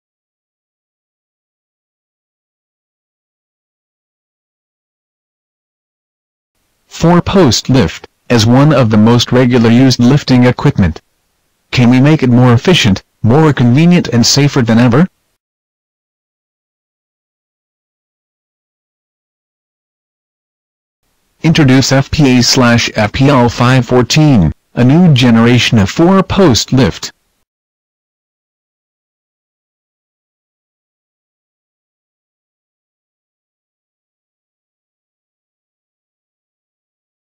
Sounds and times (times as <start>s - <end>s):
Speech: 6.9s - 11.0s, 11.7s - 15.2s, 21.4s - 27.2s.